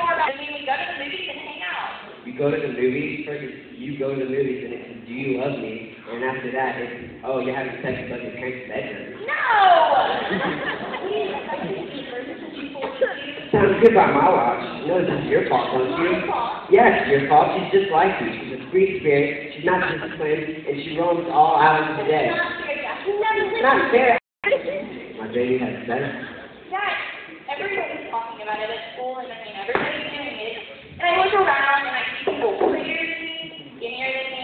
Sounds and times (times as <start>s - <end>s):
Inside, large room or hall: 0.0s - 34.4s.